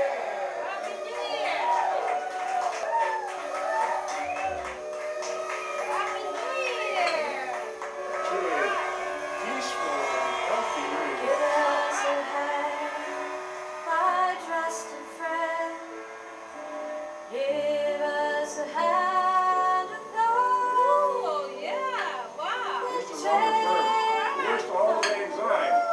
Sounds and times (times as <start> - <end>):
Singing: 0.0 - 16.1, 17.2 - 25.9
Music: 0.0 - 25.9.